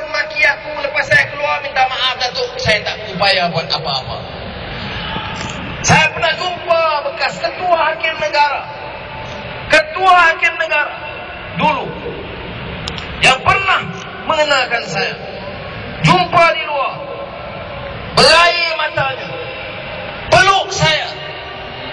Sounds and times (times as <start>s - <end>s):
Male speech, man speaking: 0.0s - 4.3s, 5.9s - 8.8s, 9.7s - 12.1s, 13.2s - 15.4s, 16.0s - 17.2s, 18.2s - 19.4s, 20.3s - 21.3s.